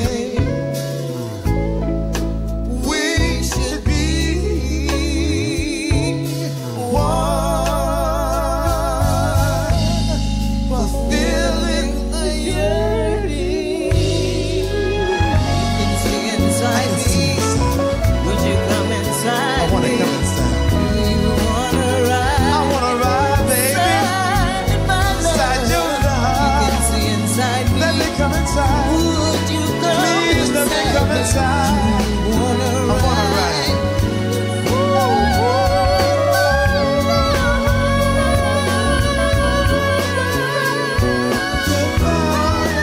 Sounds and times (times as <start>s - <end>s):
Inside, large room or hall: 0.0s - 42.8s
Music: 0.0s - 42.8s
Singing: 2.7s - 42.8s.